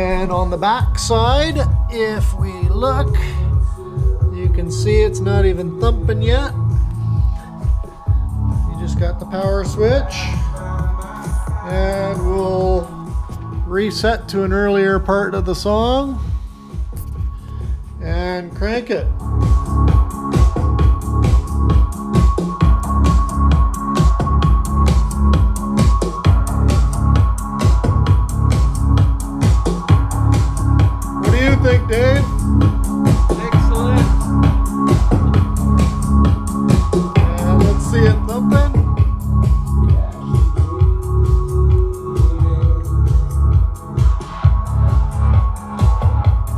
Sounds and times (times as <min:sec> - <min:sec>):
Speech: 0:00.0 - 0:03.4, 0:04.3 - 0:06.6, 0:08.7 - 0:10.4, 0:13.7 - 0:16.2, 0:18.0 - 0:19.1, 0:31.3 - 0:32.3, 0:33.3 - 0:34.2, 0:37.2 - 0:38.8, 0:39.9 - 0:40.4
Music: 0:00.0 - 0:46.5.